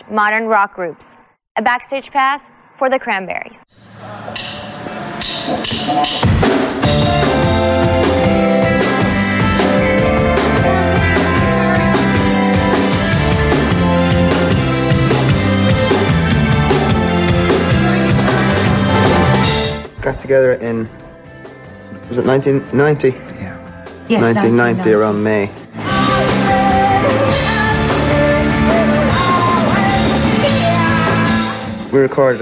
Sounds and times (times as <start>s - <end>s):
Music: 3.8s - 32.4s.